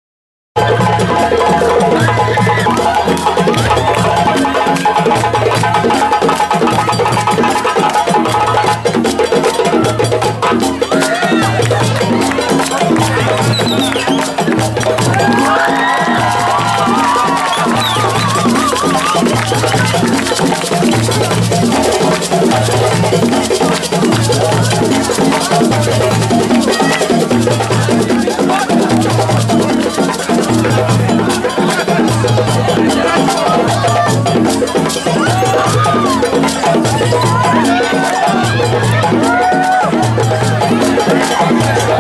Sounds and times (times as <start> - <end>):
Wood block: 0.6 - 42.0.